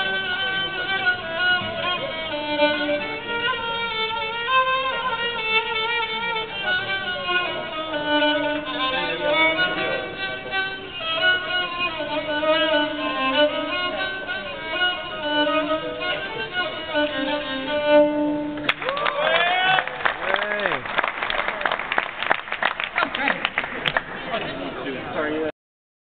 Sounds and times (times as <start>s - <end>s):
Speech: 0.0s - 2.2s, 6.5s - 7.8s, 8.7s - 14.8s, 24.2s - 25.6s
Violin, fiddle: 0.0s - 18.8s.